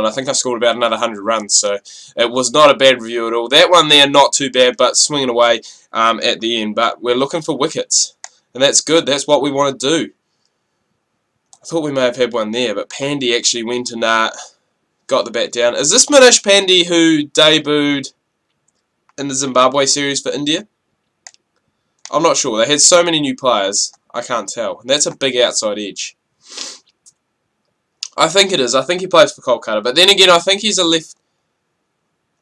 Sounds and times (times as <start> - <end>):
Speech: 0.0 - 10.2, 11.6 - 18.2, 19.2 - 20.8, 22.1 - 26.2, 28.0 - 31.2
Inside, small room: 0.0 - 32.4
Clicking: 11.4 - 11.7, 18.5 - 19.2, 21.0 - 22.2.